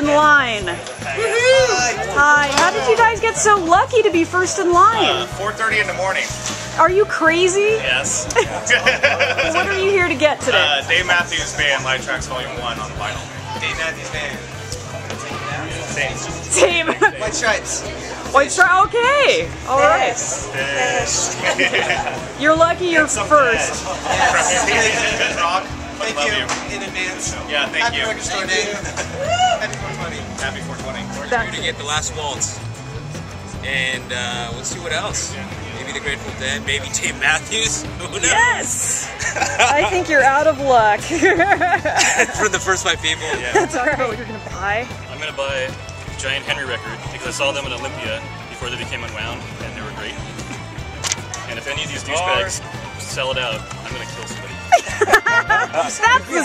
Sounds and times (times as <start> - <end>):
Music: 0.0 - 56.4.